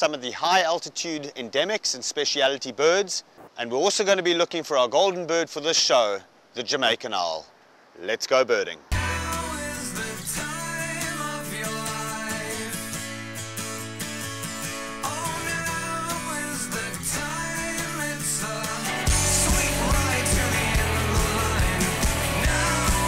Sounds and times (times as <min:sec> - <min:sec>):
Speech: 0:00.0 - 0:08.8
Music: 0:09.0 - 0:23.0.